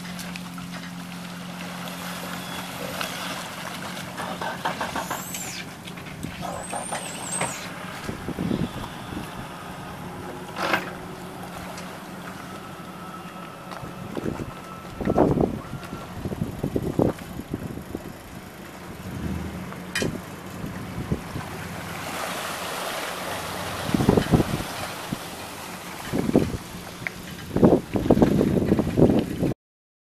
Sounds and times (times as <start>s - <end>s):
Boat, Water vehicle: 0.0s - 29.6s.